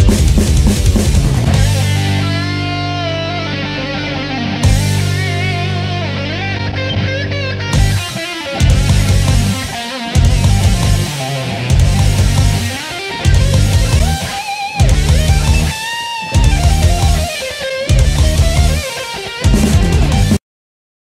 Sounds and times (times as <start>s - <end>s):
Strum: 0.0s - 20.4s.